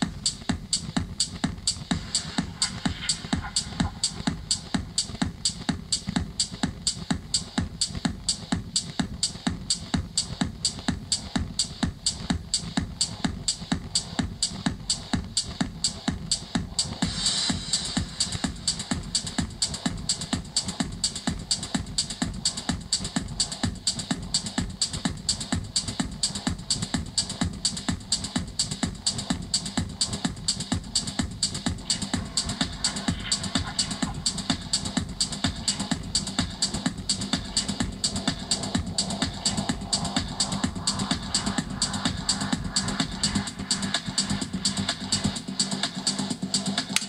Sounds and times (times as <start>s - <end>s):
Music: 0.0s - 47.0s.